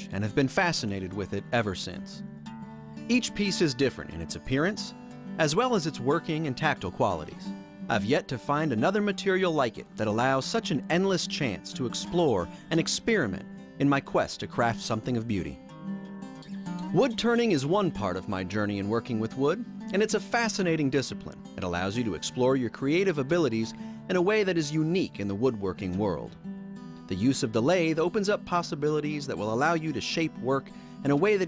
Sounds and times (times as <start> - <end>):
Speech: 0.0 - 2.2, 3.1 - 15.6, 16.9 - 26.4, 27.1 - 31.4
Music: 0.0 - 31.4.